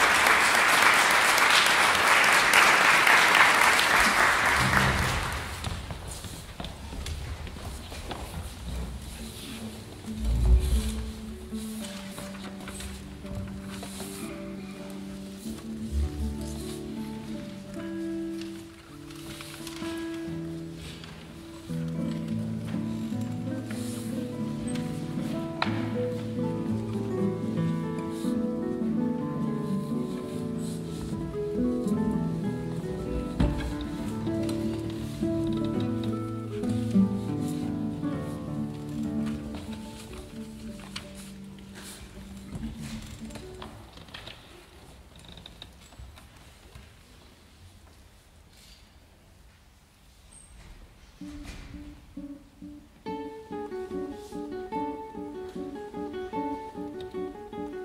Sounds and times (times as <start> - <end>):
Acoustic guitar: 3.4 - 6.5, 7.8 - 45.9, 50.1 - 57.8
Strum: 9.0 - 44.3.